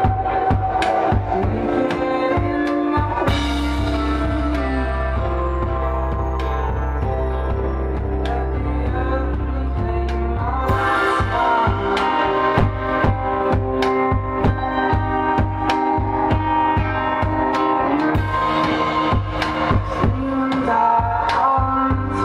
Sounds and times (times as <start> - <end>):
Singing: 0.0 - 7.2, 7.9 - 22.2
Music: 0.0 - 22.2.